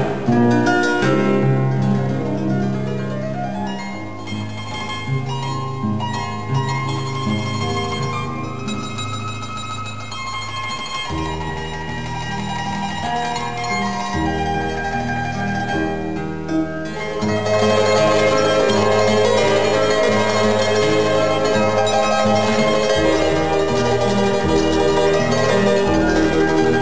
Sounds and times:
Classical music: 0:00.0 - 0:26.8
Harp: 0:00.0 - 0:26.8
Zither: 0:00.0 - 0:26.8.

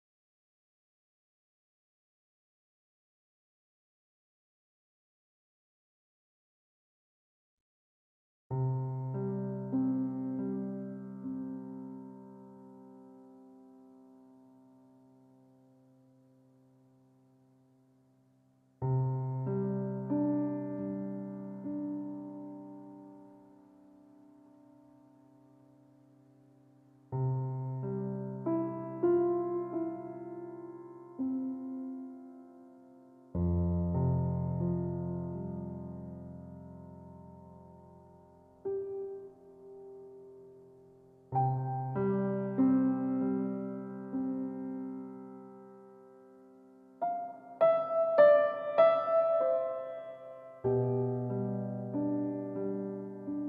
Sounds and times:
Music: 0:08.5 - 0:53.4.

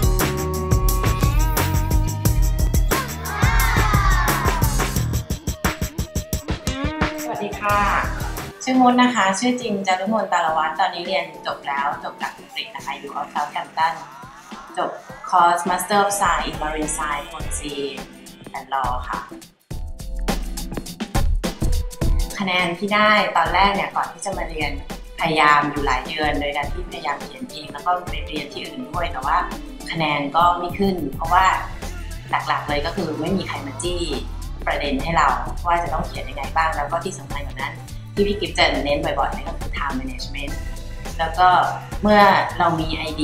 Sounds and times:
Music: 0:00.0 - 0:43.2
Speech: 0:07.3 - 0:14.0, 0:14.8 - 0:19.3, 0:22.4 - 0:31.7, 0:32.3 - 0:40.6, 0:41.2 - 0:43.2.

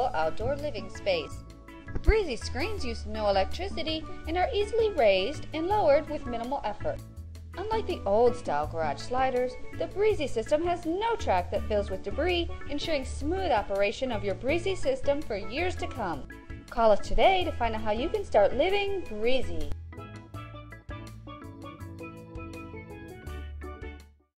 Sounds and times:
Speech: 0:00.0 - 0:01.4, 0:02.1 - 0:07.0, 0:07.6 - 0:19.8
Music: 0:00.0 - 0:24.3.

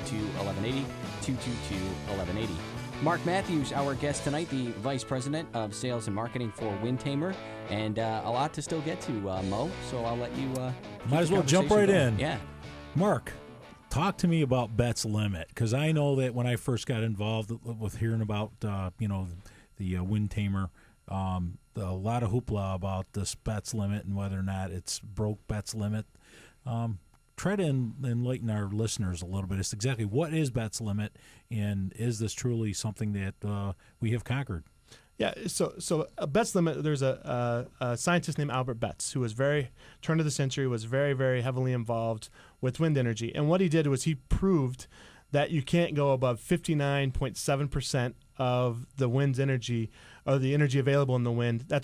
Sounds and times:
Speech: 0:00.0 - 0:12.4, 0:13.0 - 0:34.6, 0:35.2 - 0:51.8.

